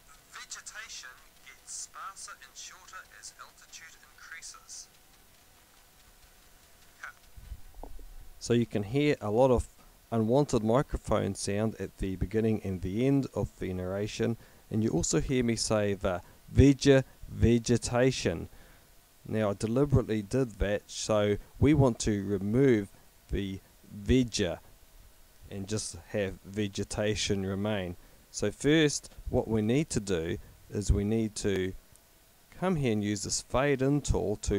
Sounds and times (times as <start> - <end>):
Speech: 0.2 - 5.0, 7.0 - 7.2, 8.4 - 18.5, 19.3 - 24.6, 25.5 - 31.8, 32.6 - 34.5.